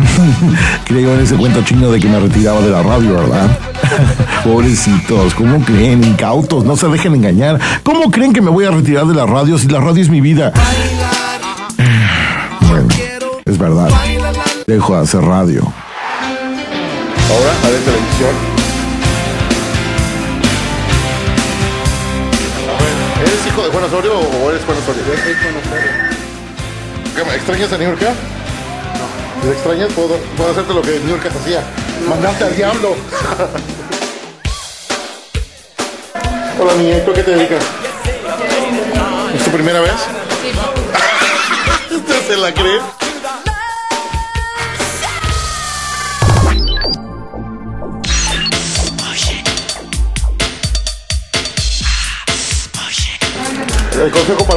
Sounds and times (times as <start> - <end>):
Music: 0.0 - 54.5.